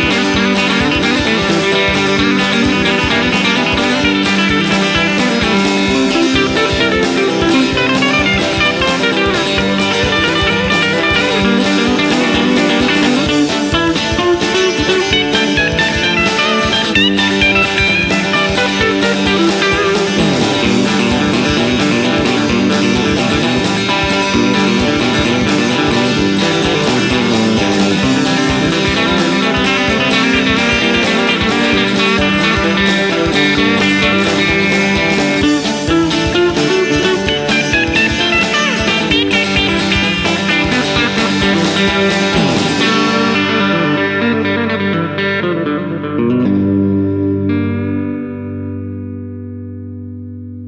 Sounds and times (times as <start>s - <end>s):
Country: 0.0s - 50.4s
Acoustic guitar: 0.0s - 50.6s
Bass guitar: 0.0s - 50.6s
Electric guitar: 0.0s - 50.6s
Strum: 0.0s - 50.6s.